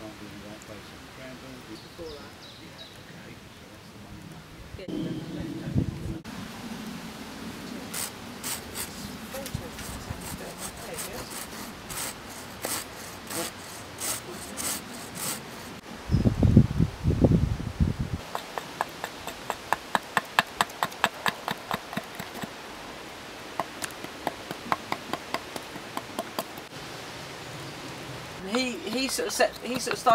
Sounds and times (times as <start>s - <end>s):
Sawing: 7.9s - 15.8s, 18.2s - 22.6s
Wood: 18.2s - 22.6s, 28.5s - 30.1s.